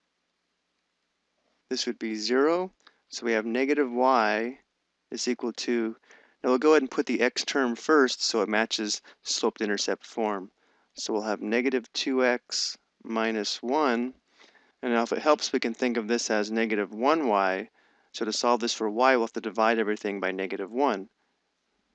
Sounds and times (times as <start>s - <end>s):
Speech: 1.7s - 4.6s, 5.2s - 14.1s, 14.8s - 21.1s.